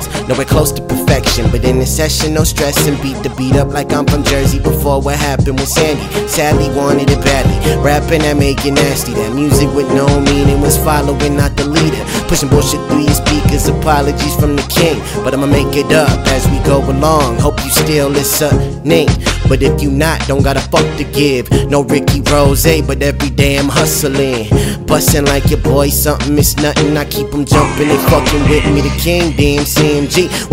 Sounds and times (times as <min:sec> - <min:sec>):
Rhythm and blues: 0:00.0 - 0:30.5.